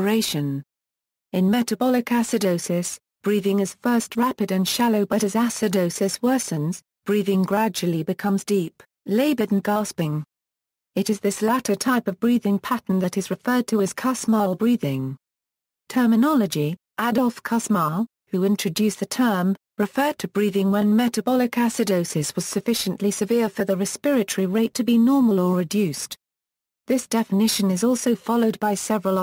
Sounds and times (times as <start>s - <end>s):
Speech: 0.0s - 0.7s, 1.4s - 10.3s, 11.0s - 15.2s, 15.9s - 26.2s, 26.9s - 29.2s.